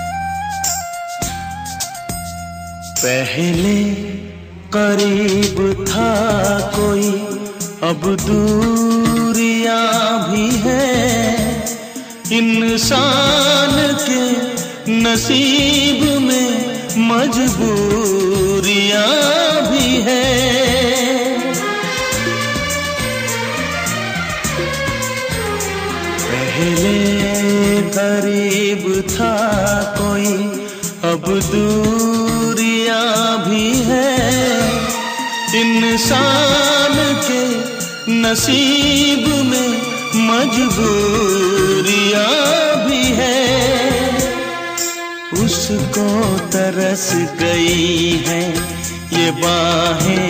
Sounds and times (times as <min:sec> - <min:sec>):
Music of Bollywood: 0:00.0 - 0:50.3.